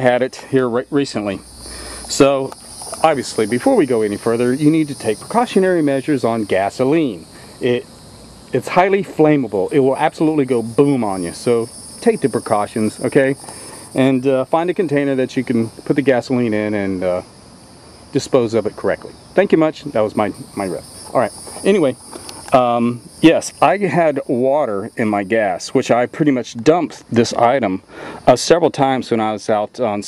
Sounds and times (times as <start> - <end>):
Cricket: 0.0 - 30.0.